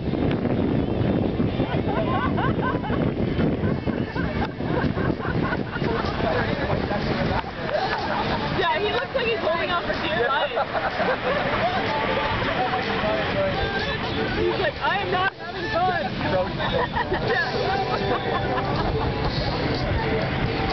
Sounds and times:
Boat, Water vehicle: 0:00.0 - 0:20.7
Music: 0:15.6 - 0:20.7.

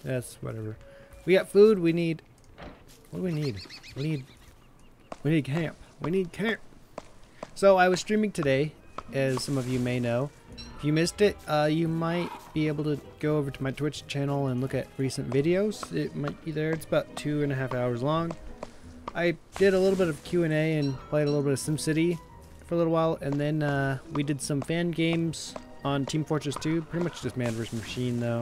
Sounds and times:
Music: 0:00.0 - 0:01.9, 0:07.6 - 0:28.4
Speech: 0:00.0 - 0:02.2, 0:03.1 - 0:04.3, 0:05.2 - 0:06.6, 0:07.6 - 0:18.4, 0:19.2 - 0:28.4.

